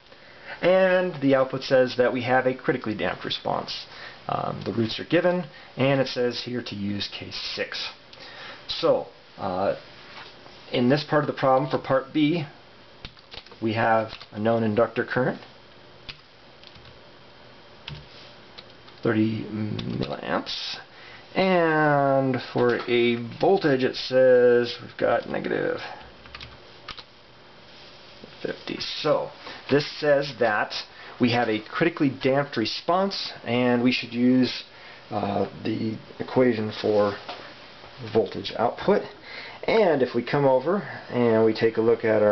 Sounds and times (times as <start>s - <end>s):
Inside, small room: 0.0s - 42.3s
Speech: 0.6s - 8.0s, 8.7s - 9.8s, 10.7s - 12.6s, 13.6s - 15.5s, 19.0s - 26.0s, 28.4s - 37.3s, 38.0s - 42.3s.